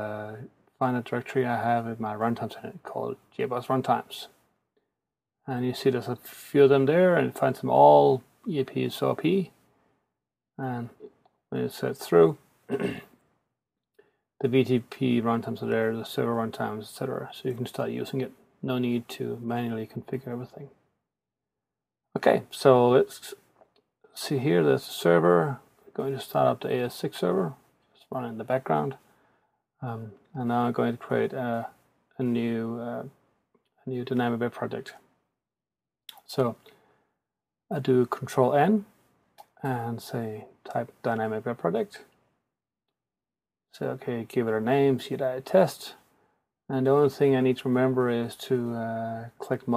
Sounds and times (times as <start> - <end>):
Speech: 0.0 - 4.4, 5.5 - 9.6, 10.6 - 13.0, 14.4 - 20.8, 22.2 - 23.4, 24.2 - 29.0, 29.8 - 33.1, 33.9 - 35.0, 36.1 - 36.7, 37.7 - 42.1, 43.7 - 46.0, 46.7 - 49.7.